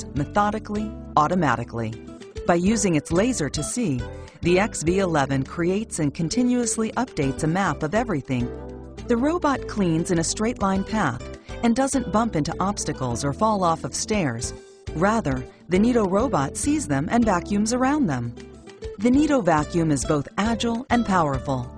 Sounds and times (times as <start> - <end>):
Speech: 0.0 - 8.5, 9.1 - 18.3, 19.0 - 21.7
Music: 0.0 - 21.7.